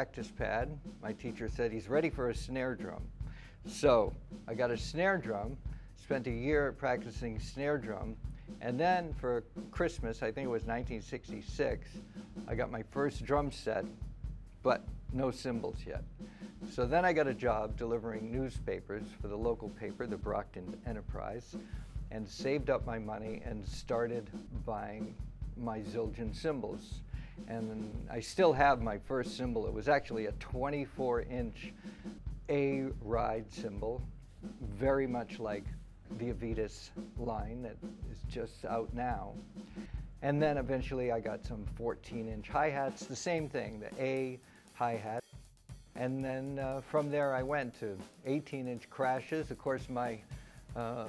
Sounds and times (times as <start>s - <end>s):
Speech: 0.0s - 3.1s, 3.7s - 14.0s, 14.6s - 16.0s, 16.7s - 31.7s, 32.5s - 34.0s, 34.6s - 39.4s, 40.2s - 45.2s, 46.0s - 51.0s.